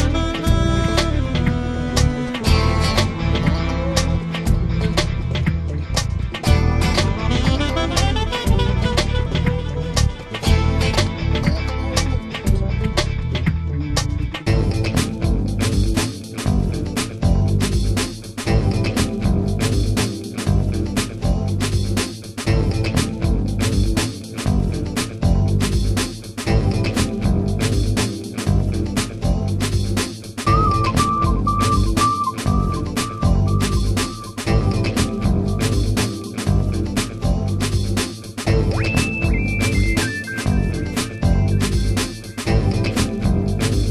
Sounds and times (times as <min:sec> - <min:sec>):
Music: 0:00.0 - 0:43.9.